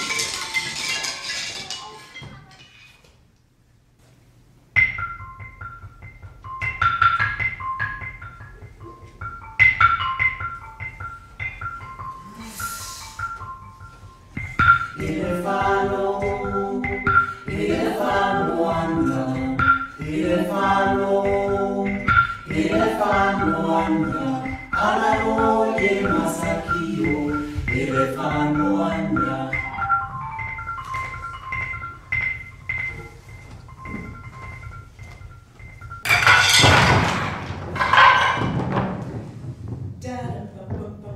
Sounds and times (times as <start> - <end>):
Music: 0.0 - 2.2, 4.7 - 41.1.